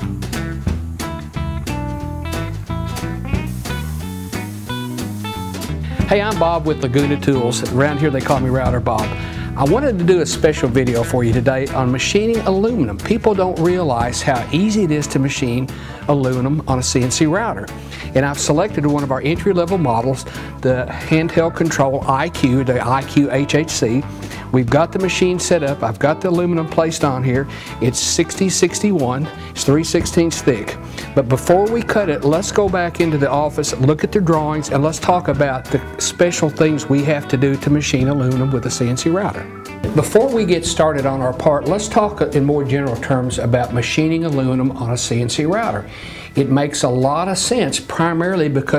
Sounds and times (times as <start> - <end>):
Music: 0.0 - 48.7
Speech: 6.1 - 48.7.